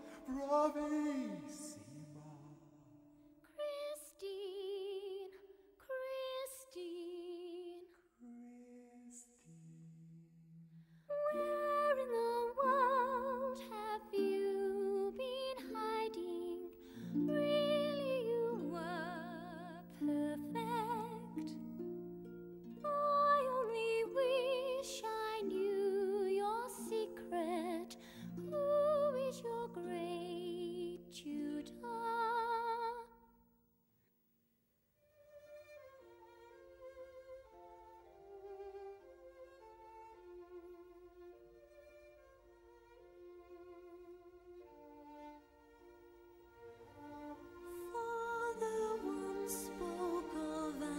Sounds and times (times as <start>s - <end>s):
Opera: 0.0s - 9.5s, 11.0s - 33.2s, 35.2s - 50.9s.